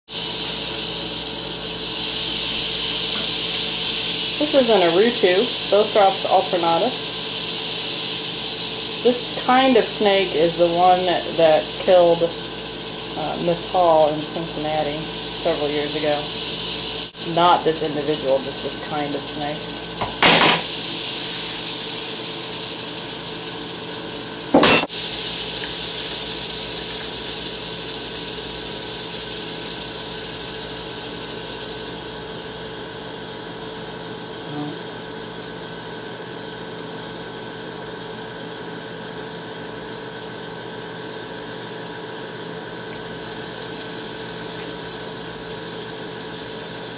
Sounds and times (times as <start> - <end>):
Inside, small room: 0.1 - 46.9
Speech: 4.4 - 7.0, 9.0 - 12.4, 13.2 - 16.3, 17.2 - 19.7, 34.4 - 34.8.